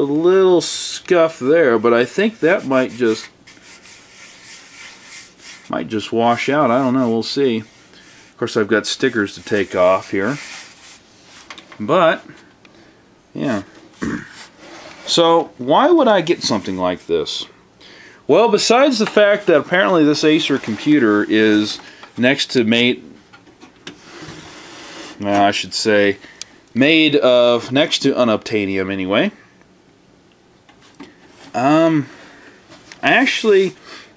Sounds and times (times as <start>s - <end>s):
Speech: 0.0s - 3.3s, 5.7s - 7.7s, 8.4s - 10.4s, 11.8s - 12.4s, 13.4s - 14.3s, 15.1s - 17.6s, 18.3s - 23.1s, 25.2s - 26.2s, 26.8s - 29.4s, 31.5s - 32.1s, 33.0s - 33.8s
Inside, small room: 0.0s - 34.1s.